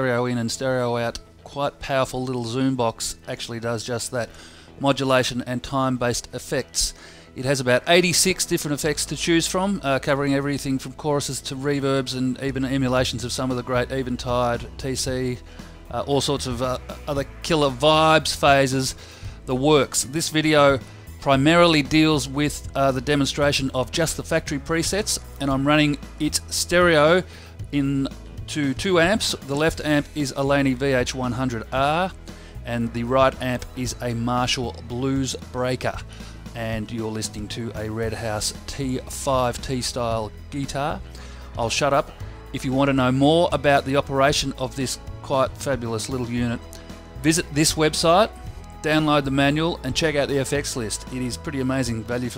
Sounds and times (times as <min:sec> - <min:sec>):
Speech: 0:00.0 - 0:36.0, 0:36.6 - 0:41.0, 0:41.6 - 0:46.6, 0:47.2 - 0:52.3
Bass guitar: 0:08.7 - 0:52.3.